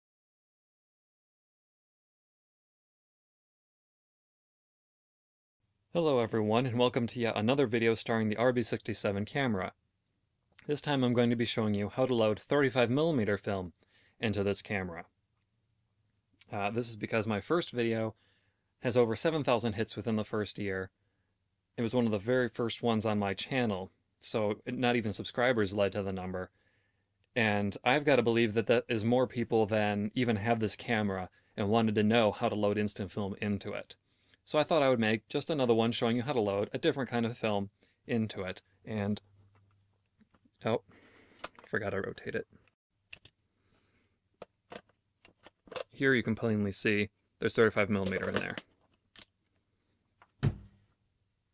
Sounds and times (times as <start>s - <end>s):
Speech: 5.9s - 9.8s, 10.6s - 15.1s, 16.4s - 18.2s, 18.8s - 20.9s, 21.8s - 26.5s, 27.4s - 39.2s, 40.6s - 40.9s, 41.7s - 42.5s, 46.0s - 48.6s.